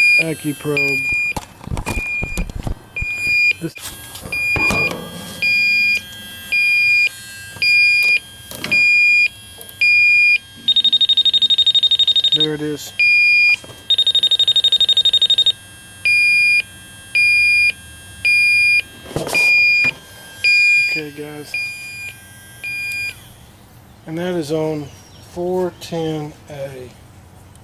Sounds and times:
Smoke detector, smoke alarm: 0:00.0 - 0:01.4, 0:02.0 - 0:23.2.

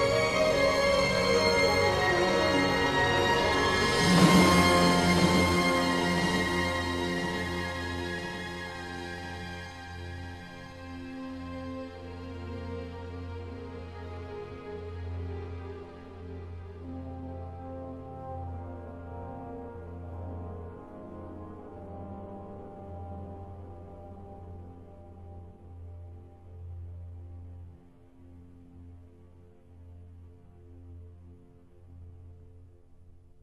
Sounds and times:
Music: 0:00.0 - 0:33.4.

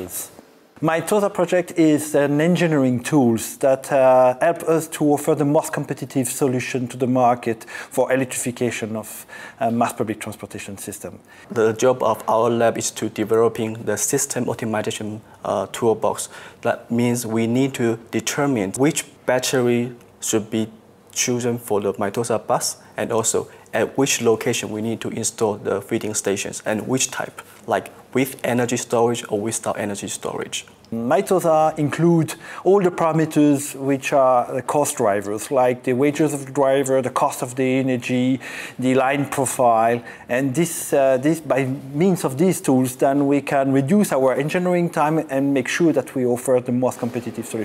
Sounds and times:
Speech: 0:00.0 - 0:47.6.

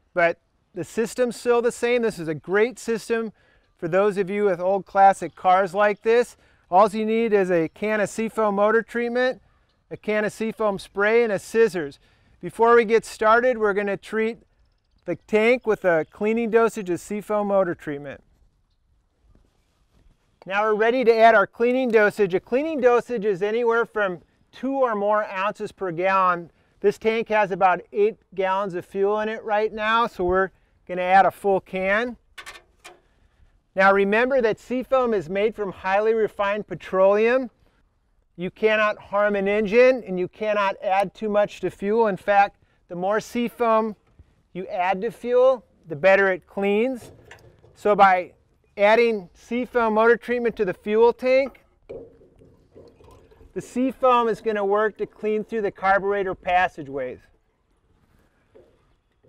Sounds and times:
Speech: 0:00.2 - 0:14.4, 0:15.1 - 0:18.2, 0:20.4 - 0:32.2, 0:33.8 - 0:37.5, 0:38.4 - 0:44.0, 0:44.6 - 0:47.1, 0:47.8 - 0:51.6, 0:53.6 - 0:57.3.

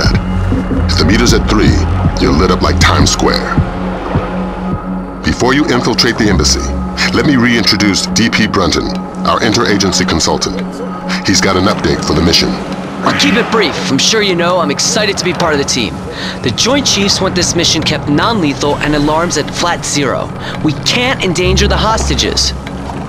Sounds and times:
Speech: 0:00.0 - 0:00.2, 0:00.9 - 0:03.6, 0:05.2 - 0:22.6.

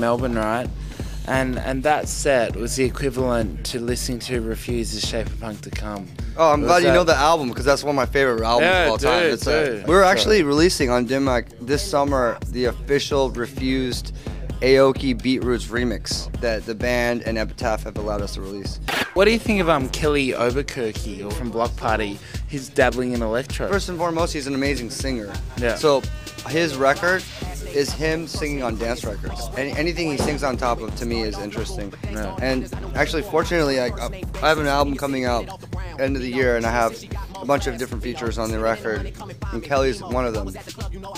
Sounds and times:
Speech: 0:00.0 - 0:00.7, 0:01.3 - 0:40.7
Music: 0:00.0 - 0:41.1.

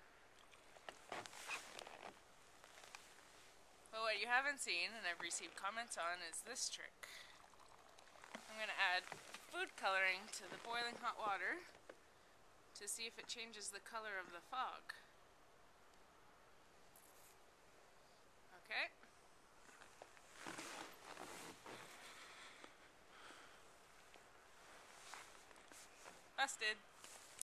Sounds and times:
Speech: 0:04.0 - 0:07.0, 0:08.5 - 0:11.7, 0:12.8 - 0:15.1, 0:18.5 - 0:19.0, 0:26.4 - 0:26.8.

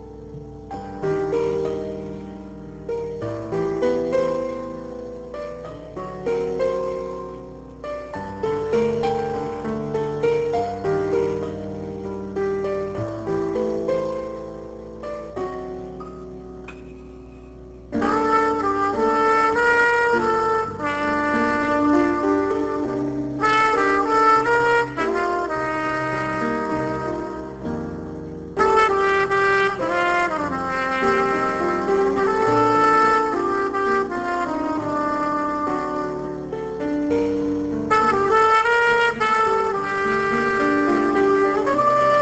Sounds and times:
Jazz: 0:00.0 - 0:42.2.

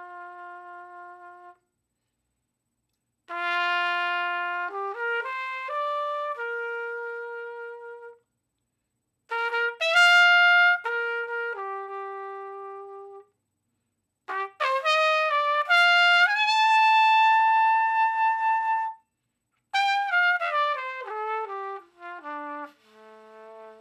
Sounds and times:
Trumpet: 0:00.0 - 0:01.8, 0:03.2 - 0:08.3, 0:09.3 - 0:13.4, 0:14.2 - 0:23.8.

